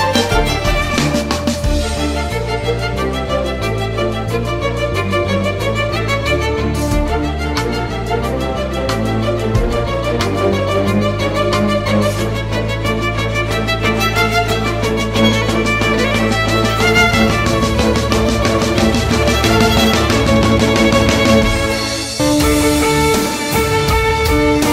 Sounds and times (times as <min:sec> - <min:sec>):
Electronica: 0:11.9 - 0:24.7.